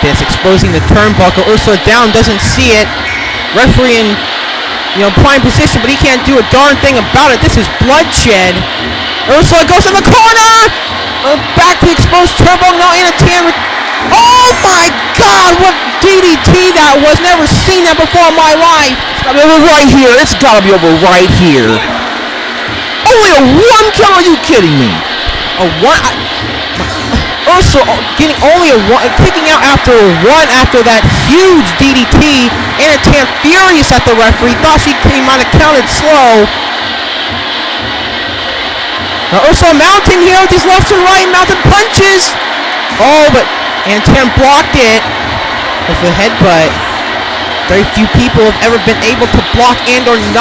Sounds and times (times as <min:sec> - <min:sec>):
Speech: 0:00.0 - 0:02.9, 0:03.5 - 0:04.2, 0:05.0 - 0:08.7, 0:09.3 - 0:21.9, 0:23.0 - 0:25.0, 0:25.6 - 0:26.2, 0:26.8 - 0:36.5, 0:39.3 - 0:42.4, 0:43.0 - 0:45.0, 0:45.9 - 0:46.8, 0:47.7 - 0:50.4.